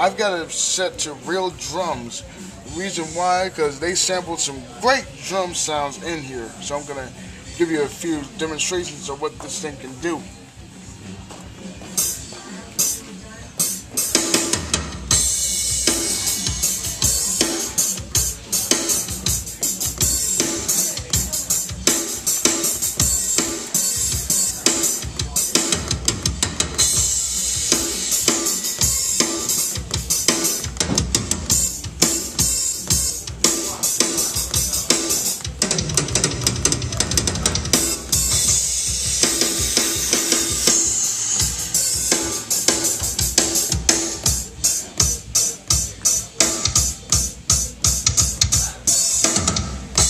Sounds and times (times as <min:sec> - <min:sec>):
Drum kit: 0:00.0 - 0:04.1, 0:04.7 - 0:50.0
Speech: 0:00.0 - 0:10.6, 0:16.6 - 0:26.0, 0:32.5 - 0:35.5, 0:42.9 - 0:49.4
Drum: 0:11.2 - 0:50.0.